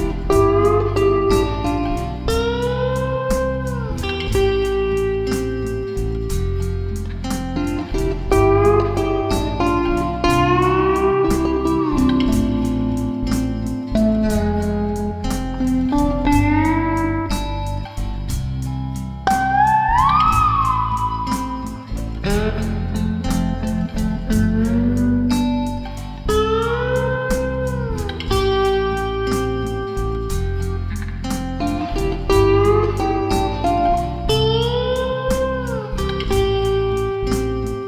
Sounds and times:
Steel guitar, slide guitar: 0.0s - 37.8s.

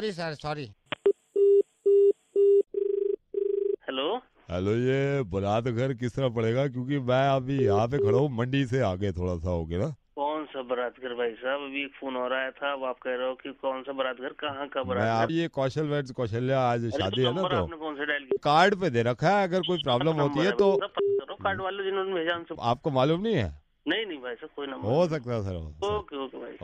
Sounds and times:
Speech: 0.0s - 0.8s, 3.8s - 26.6s.

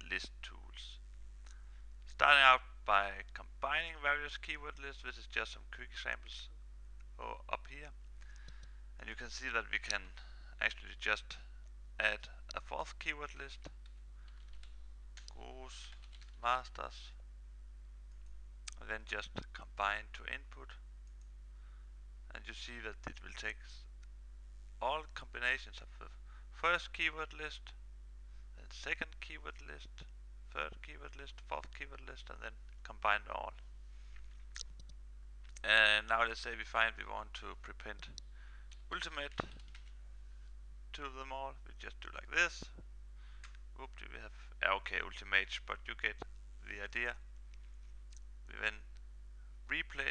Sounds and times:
Speech: 0.0s - 1.0s, 2.1s - 6.6s, 7.2s - 8.0s, 9.0s - 13.8s, 15.3s - 17.2s, 18.7s - 20.8s, 22.3s - 23.9s, 24.8s - 27.8s, 28.6s - 33.6s, 35.6s - 38.2s, 38.9s - 39.5s, 40.9s - 42.8s, 43.8s - 47.2s, 48.5s - 48.9s, 49.7s - 50.1s.

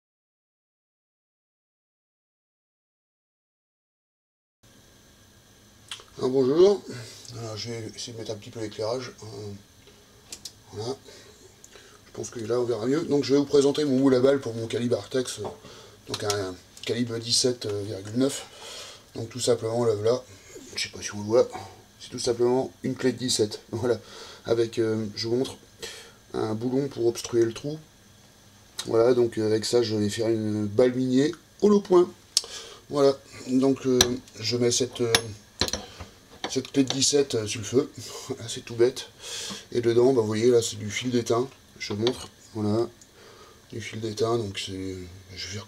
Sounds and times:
Speech: 6.2s - 9.7s, 10.7s - 11.1s, 12.1s - 18.5s, 19.2s - 25.7s, 26.3s - 27.9s, 28.8s - 32.2s, 32.9s - 35.4s, 36.5s - 43.0s, 43.7s - 45.6s.

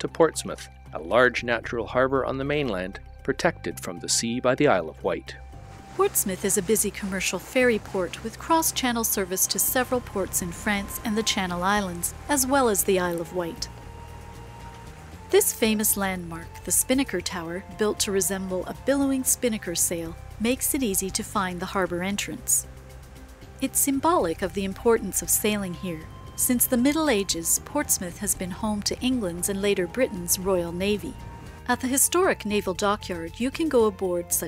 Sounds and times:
Speech: 0.0s - 5.4s, 6.0s - 13.7s, 15.4s - 22.6s, 23.6s - 34.4s
Music: 0.0s - 34.4s.

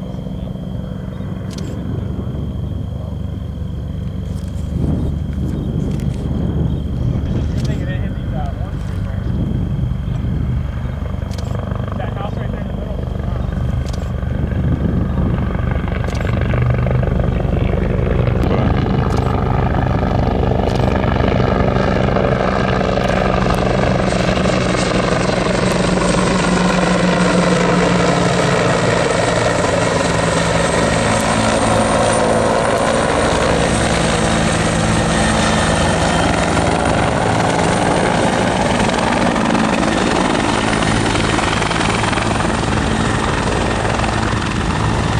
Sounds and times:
Helicopter: 0.0s - 45.1s.

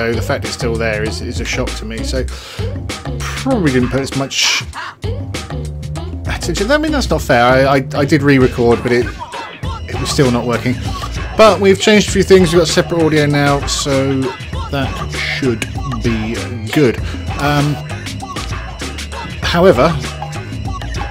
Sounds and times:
Speech: 0.0s - 2.3s, 3.2s - 4.8s, 6.3s - 9.2s, 9.9s - 10.8s, 11.4s - 17.8s, 19.4s - 20.1s
Music: 0.0s - 21.1s.

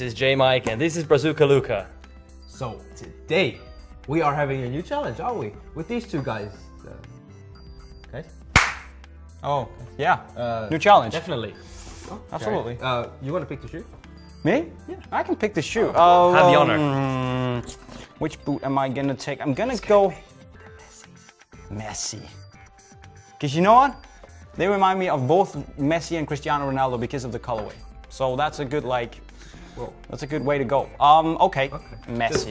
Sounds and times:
Music: 0.0s - 32.5s.

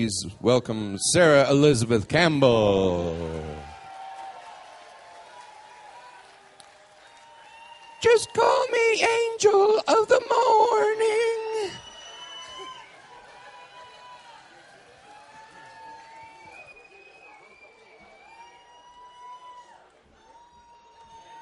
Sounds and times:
Speech: 0.0s - 3.7s, 8.0s - 11.8s.

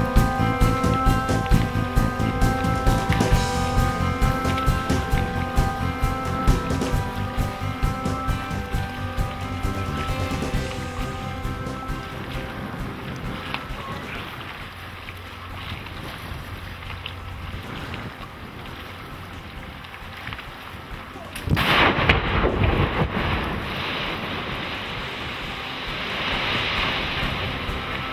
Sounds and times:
Ship: 10.0s - 28.1s.

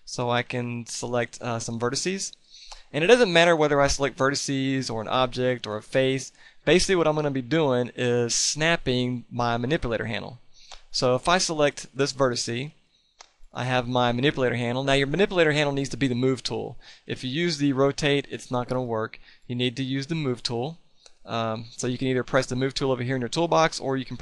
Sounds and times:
Speech: 0.1s - 12.8s, 13.6s - 24.2s.

